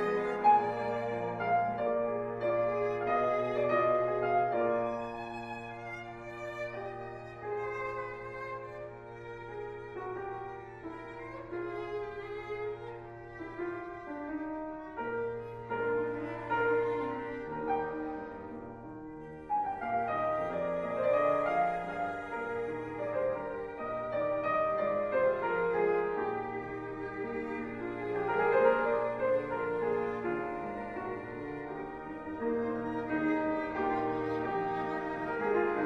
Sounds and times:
Cello: 0.0s - 35.8s
Violin, fiddle: 0.0s - 35.8s.

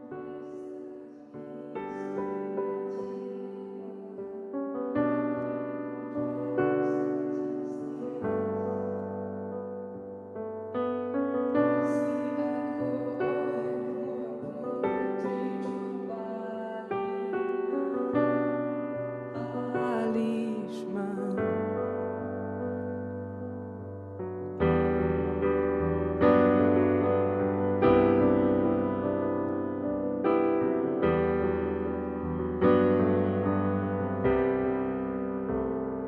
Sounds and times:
Music: 0.0s - 36.0s.

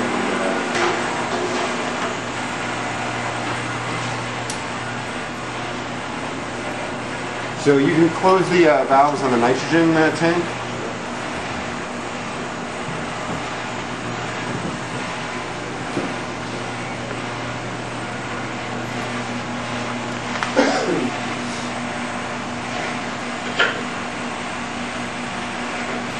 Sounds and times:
Speech: 7.6s - 10.6s.

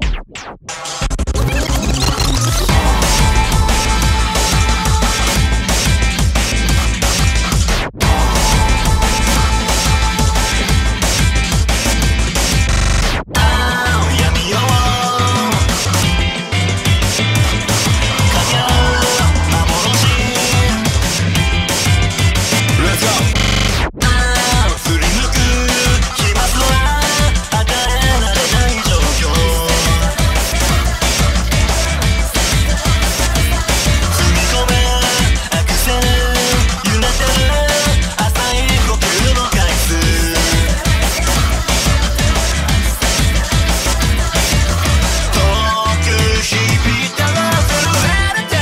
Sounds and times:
Throbbing: 0.0s - 48.3s
Music: 0.0s - 48.6s.

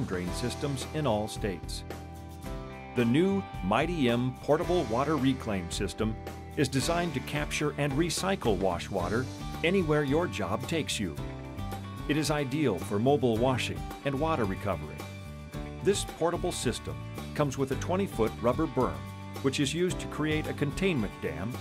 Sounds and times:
Speech: 0.0s - 1.8s, 3.0s - 11.2s, 12.1s - 15.0s, 15.8s - 21.6s
Music: 0.0s - 21.6s.

